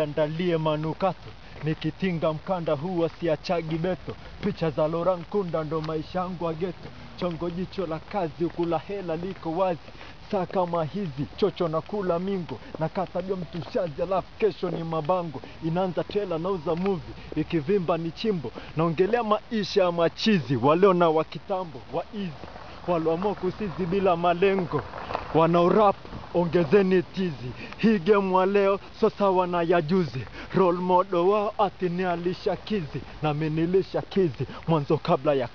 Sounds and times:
Speech: 0.0s - 35.5s
Walk, footsteps: 0.0s - 35.5s.

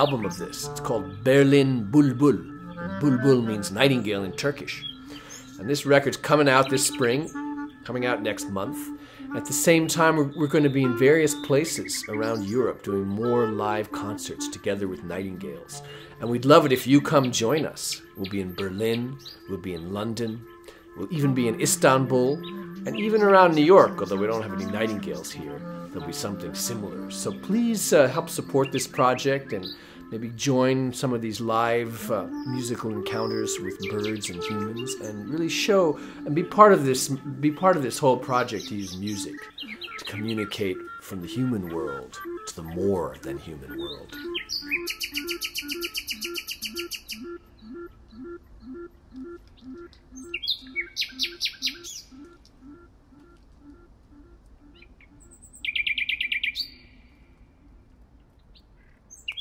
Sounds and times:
Speech: 0.0s - 4.8s, 5.6s - 7.3s, 7.9s - 20.4s, 21.0s - 44.2s
Music: 0.0s - 49.9s
Bird: 0.0s - 59.4s.

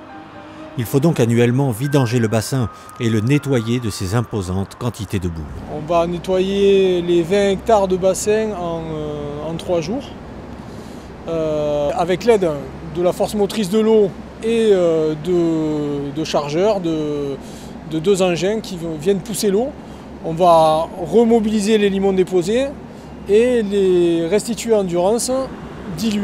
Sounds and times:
Speech: 0.8s - 10.2s, 11.3s - 26.2s.

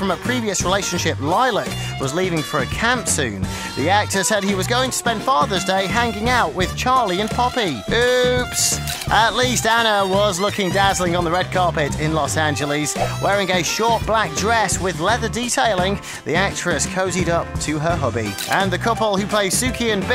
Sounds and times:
Music: 0.0s - 20.1s
Speech: 0.0s - 20.1s.

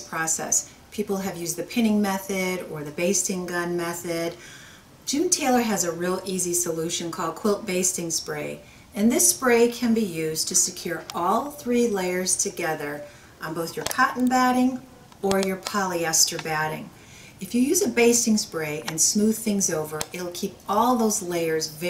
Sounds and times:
Speech: 0.0s - 4.4s, 5.1s - 21.9s.

